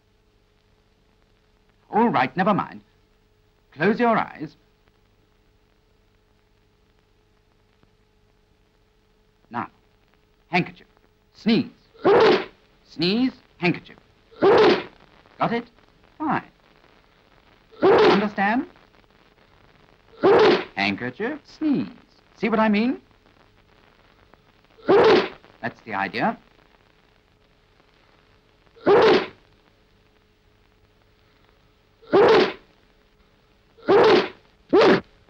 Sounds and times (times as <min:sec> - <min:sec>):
Sneeze: 0:12.0 - 0:12.6, 0:14.4 - 0:14.9, 0:17.8 - 0:18.3, 0:20.2 - 0:20.8, 0:24.8 - 0:25.4, 0:28.8 - 0:29.4, 0:32.0 - 0:32.7, 0:33.8 - 0:35.0.